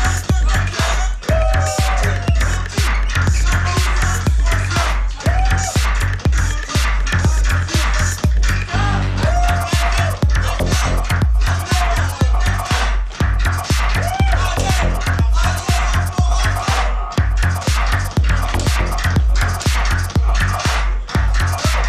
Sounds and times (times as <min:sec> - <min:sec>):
Inside, large room or hall: 0:00.0 - 0:21.8
Music: 0:00.0 - 0:21.8.